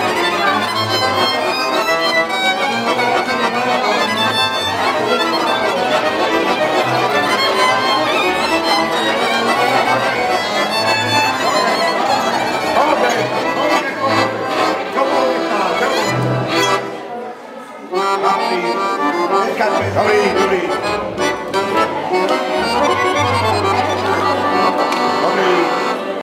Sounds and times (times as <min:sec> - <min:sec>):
Speech: 0:00.0 - 0:01.7, 0:02.7 - 0:26.2
Music: 0:00.0 - 0:17.0, 0:18.0 - 0:26.2.